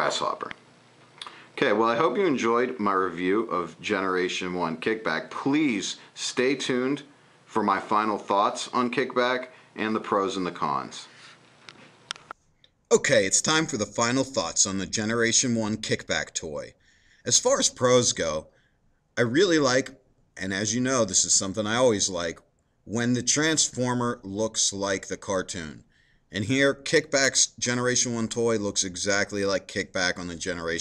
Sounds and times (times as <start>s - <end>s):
Speech: 0.0s - 0.6s, 1.6s - 11.3s, 12.9s - 18.5s, 19.2s - 30.8s.